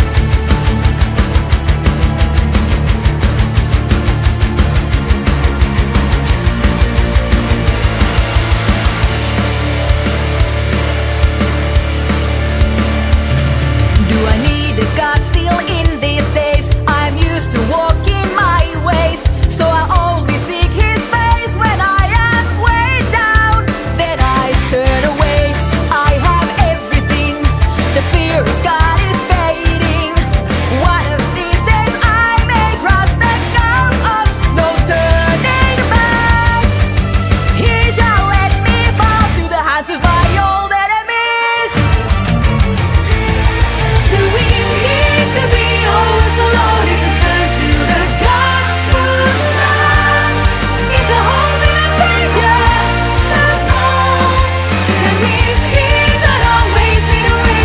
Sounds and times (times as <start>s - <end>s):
Music: 0.0s - 57.6s.